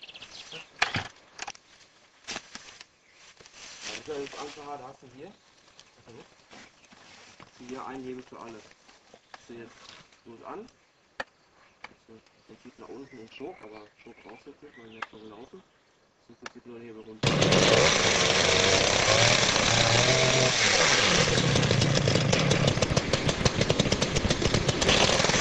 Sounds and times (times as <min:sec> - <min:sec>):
Speech: 0:03.9 - 0:05.4, 0:06.0 - 0:06.3, 0:07.6 - 0:08.7, 0:09.4 - 0:10.7, 0:12.1 - 0:15.6, 0:16.3 - 0:17.2
Chainsaw: 0:17.2 - 0:25.4.